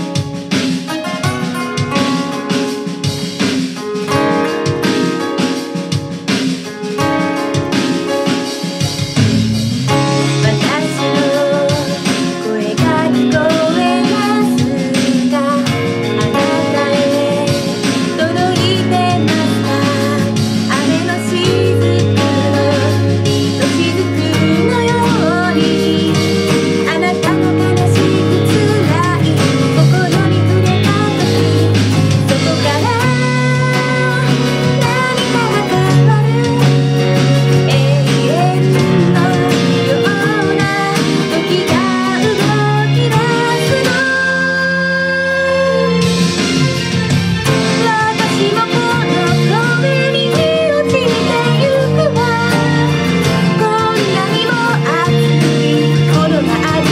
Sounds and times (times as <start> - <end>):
Acoustic guitar: 0.0 - 56.9.